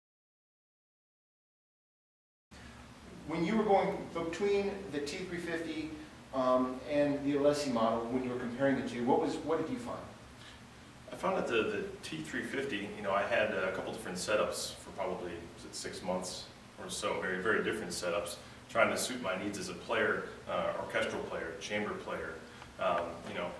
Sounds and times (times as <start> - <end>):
Speech: 3.2 - 10.2, 11.1 - 23.6.